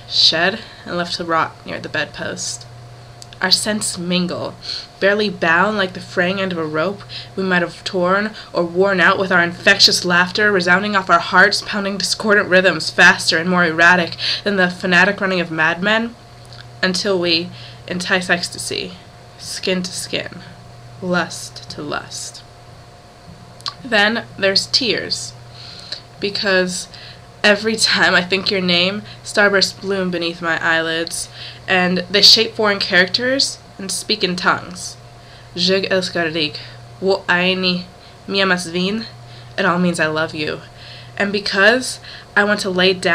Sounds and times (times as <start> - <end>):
Speech: 0.1 - 16.2, 16.8 - 22.4, 23.7 - 25.4, 26.2 - 35.0, 35.6 - 43.1.